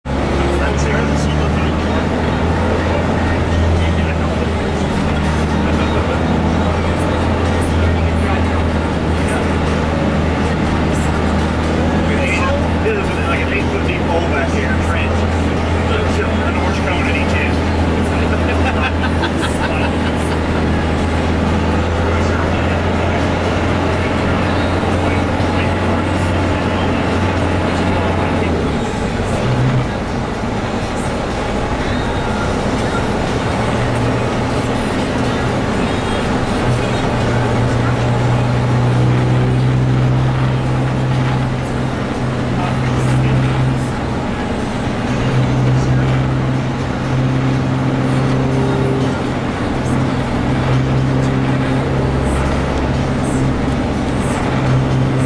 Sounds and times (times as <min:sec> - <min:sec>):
Bus: 0:00.0 - 0:55.2
Speech: 0:00.1 - 0:55.2.